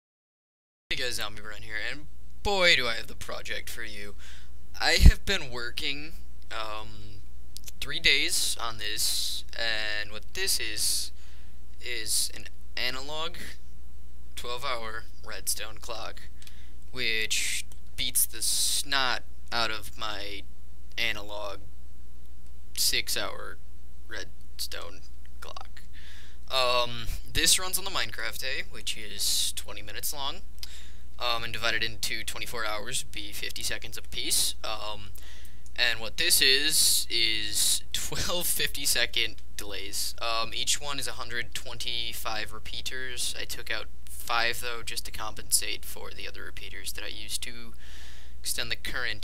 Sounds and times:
Speech: 0:00.9 - 0:04.2, 0:04.8 - 0:11.2, 0:11.8 - 0:13.6, 0:14.4 - 0:21.6, 0:22.8 - 0:25.9, 0:26.5 - 0:30.5, 0:31.2 - 0:35.2, 0:35.8 - 0:47.8, 0:48.4 - 0:49.2.

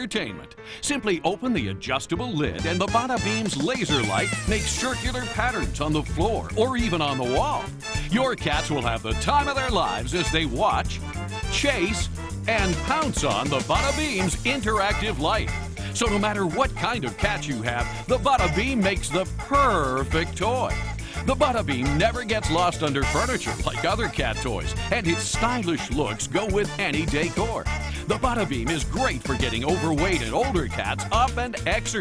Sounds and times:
Music: 0:00.0 - 0:32.0
Speech: 0:00.0 - 0:32.0.

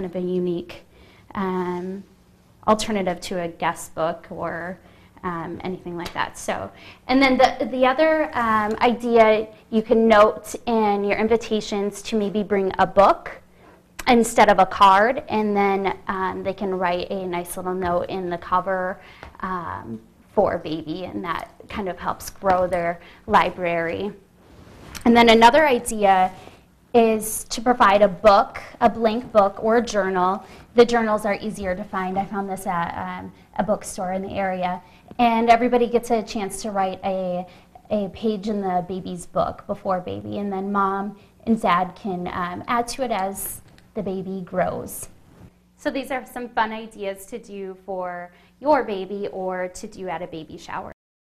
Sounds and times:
Speech: 0:00.0 - 0:13.4, 0:14.0 - 0:24.2, 0:25.0 - 0:26.4, 0:27.0 - 0:45.1, 0:45.8 - 0:51.0
Inside, small room: 0:00.0 - 0:51.0.

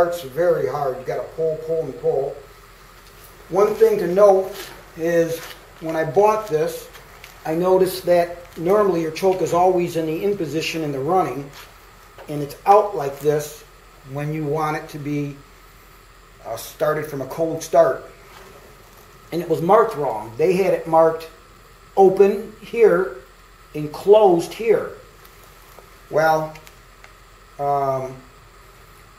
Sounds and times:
Speech: 0:00.0 - 0:02.5, 0:03.5 - 0:11.6, 0:12.3 - 0:15.4, 0:16.4 - 0:18.1, 0:19.3 - 0:21.4, 0:22.0 - 0:23.2, 0:23.8 - 0:25.0, 0:26.1 - 0:26.6, 0:27.6 - 0:28.3.

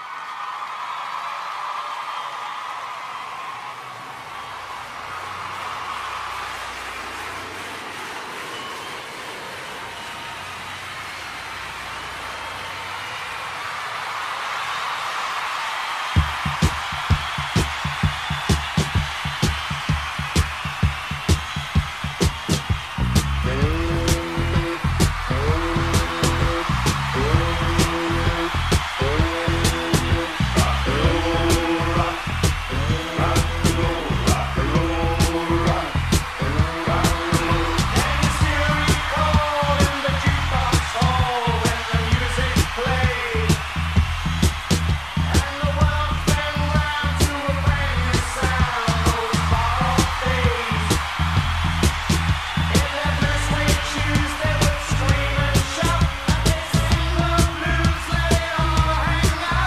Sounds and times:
Rock and roll: 0:15.4 - 0:59.6.

